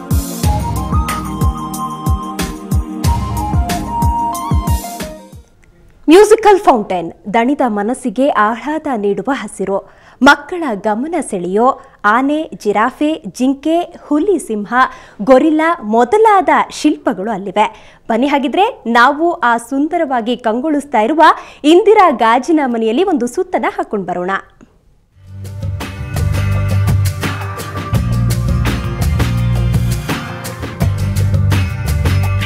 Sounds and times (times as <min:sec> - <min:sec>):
Music: 0:00.0 - 0:05.9, 0:25.2 - 0:32.4
Speech: 0:06.1 - 0:24.6.